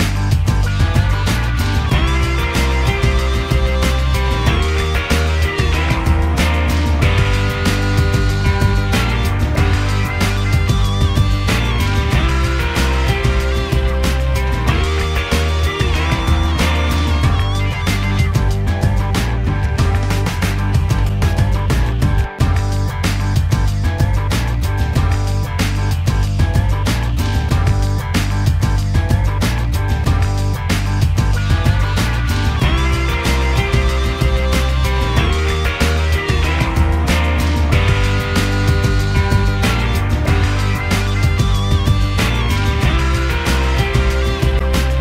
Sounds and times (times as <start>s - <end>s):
Music: 0.0s - 45.0s.